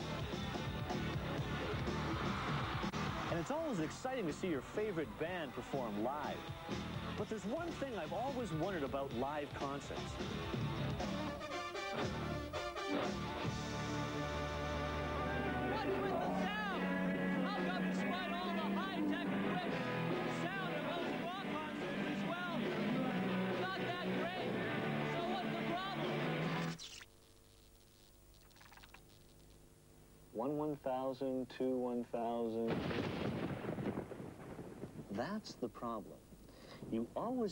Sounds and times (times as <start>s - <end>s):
Artillery fire: 32.7s - 35.1s.